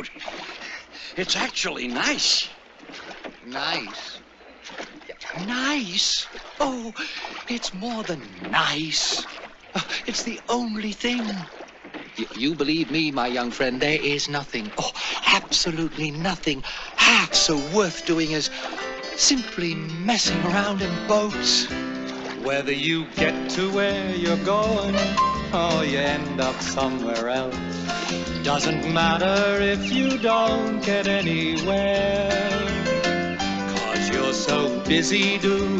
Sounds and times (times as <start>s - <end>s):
Speech: 1.2s - 2.6s, 3.5s - 4.2s, 5.4s - 9.3s, 10.0s - 11.5s, 12.2s - 18.5s, 19.2s - 20.4s
Music: 17.4s - 35.7s.